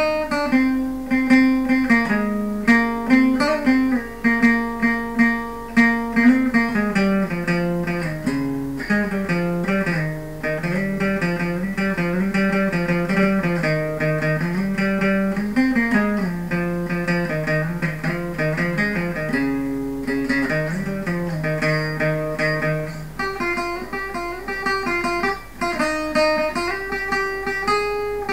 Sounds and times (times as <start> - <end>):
Guitar: 0.0 - 28.3.